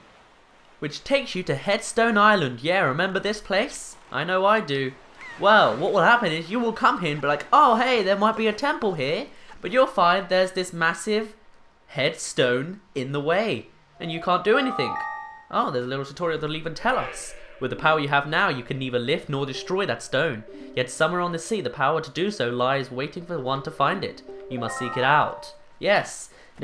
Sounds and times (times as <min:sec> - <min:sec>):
Speech: 0:00.8 - 0:26.6
Music: 0:14.1 - 0:15.6, 0:19.0 - 0:21.9, 0:22.9 - 0:25.8.